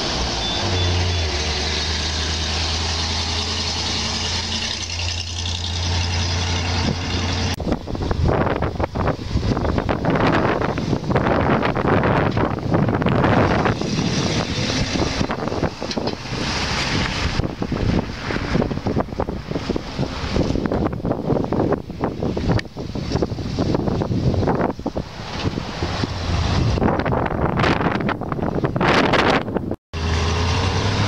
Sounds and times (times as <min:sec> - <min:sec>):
Truck: 0:00.0 - 0:31.0.